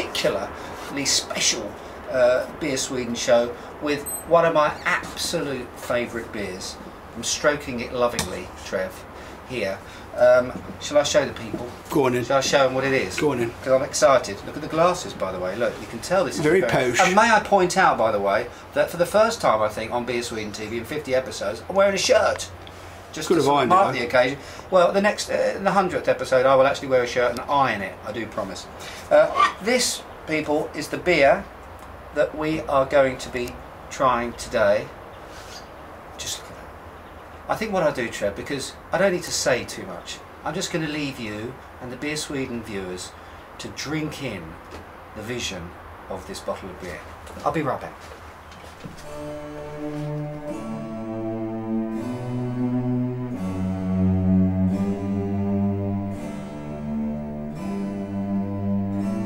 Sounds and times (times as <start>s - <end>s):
Speech: 0.0s - 31.5s, 32.2s - 35.0s, 36.2s - 36.7s, 37.5s - 44.6s, 45.2s - 48.1s
Music: 49.0s - 59.2s.